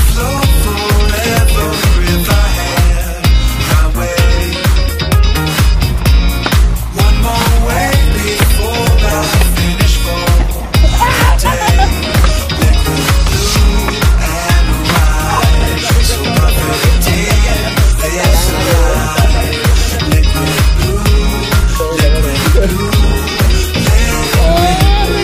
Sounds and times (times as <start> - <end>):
Music: 0.0 - 25.2.